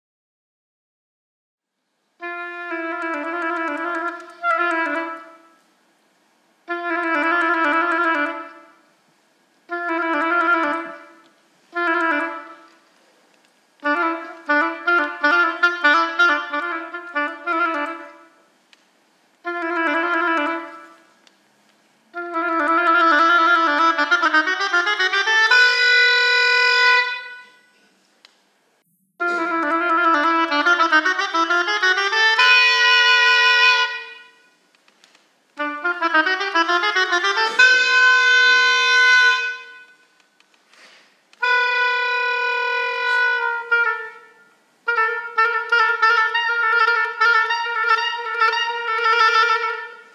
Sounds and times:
Clarinet: 2.2s - 5.7s, 6.6s - 8.9s, 9.7s - 13.1s, 13.8s - 18.5s, 19.4s - 21.2s, 22.1s - 28.0s, 29.0s - 34.6s, 35.6s - 40.2s, 40.8s - 50.1s.

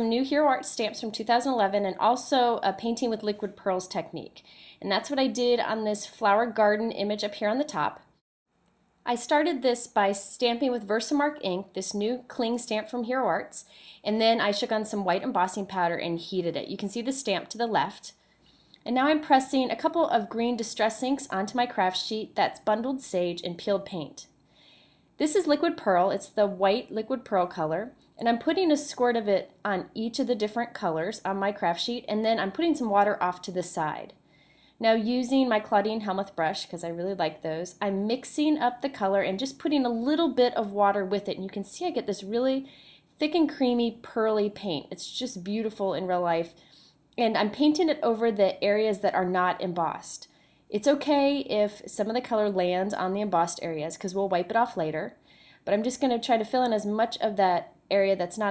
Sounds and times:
Speech: 0.0s - 8.1s, 9.1s - 18.2s, 18.8s - 24.3s, 25.2s - 34.2s, 34.8s - 46.6s, 47.2s - 58.5s.

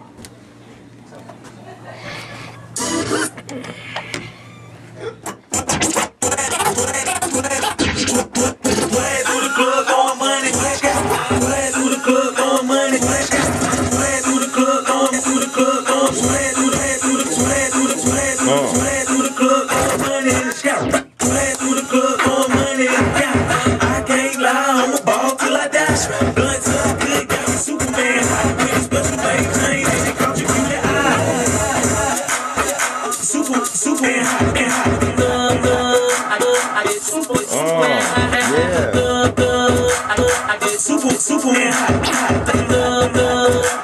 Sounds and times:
Scratching (performance technique): 5.2s - 43.8s.

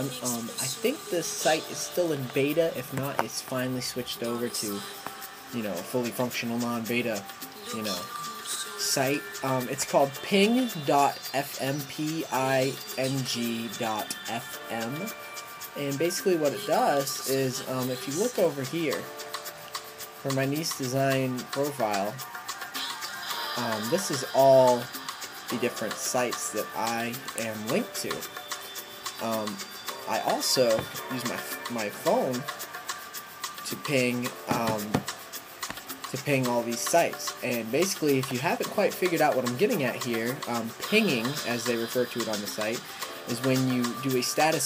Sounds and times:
Speech: 0.0s - 4.9s, 5.5s - 15.1s, 15.8s - 19.1s, 20.2s - 22.2s, 23.6s - 24.9s, 25.5s - 28.3s, 29.2s - 32.5s, 33.6s - 35.1s, 36.1s - 44.6s
Music: 0.0s - 44.6s.

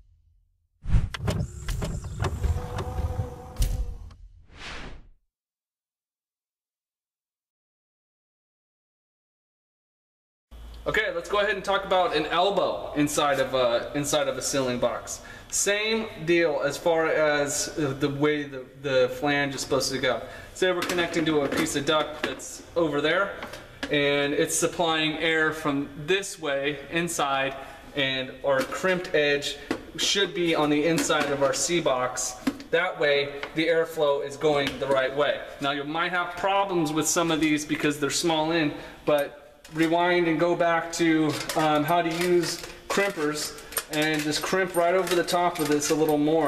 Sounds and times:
Speech: 10.8s - 46.4s.

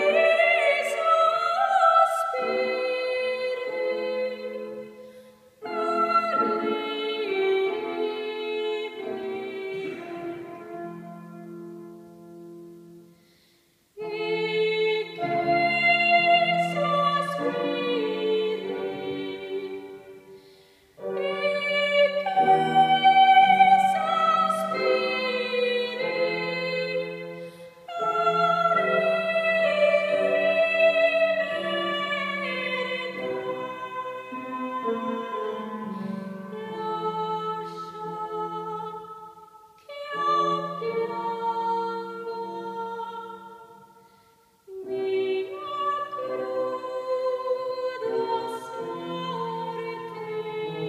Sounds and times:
Inside, large room or hall: 0.0s - 50.8s
Music: 0.0s - 50.8s.

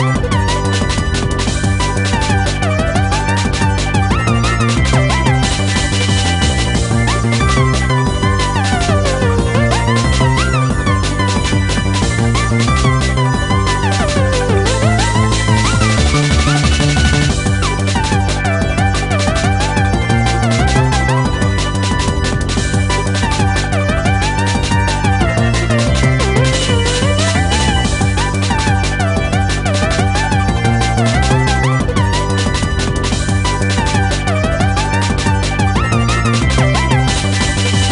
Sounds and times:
Rhythm and blues: 0.0s - 37.9s.

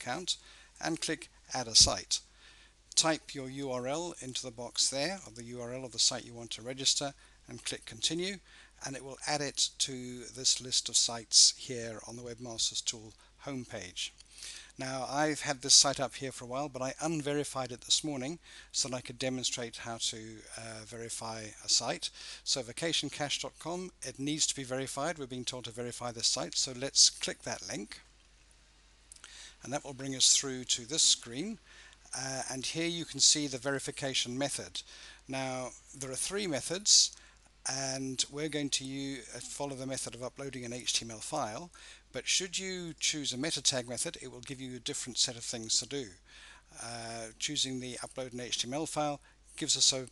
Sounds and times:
Speech: 0.0s - 2.3s, 2.9s - 14.2s, 14.8s - 28.1s, 29.6s - 46.2s, 46.8s - 50.1s.

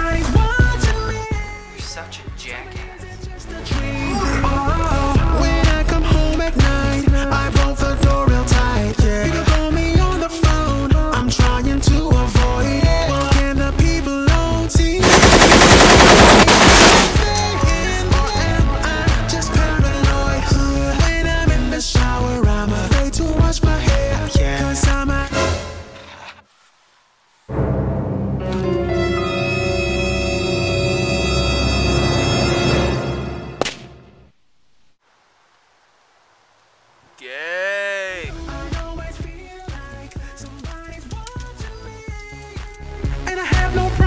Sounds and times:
Scary music: 4.1s - 8.6s, 27.5s - 33.7s.

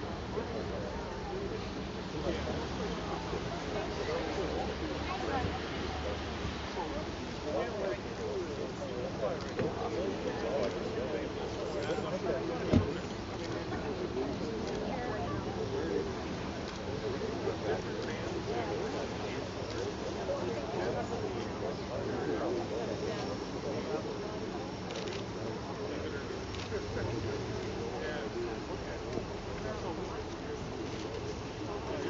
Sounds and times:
Speech: 0.0s - 32.0s.

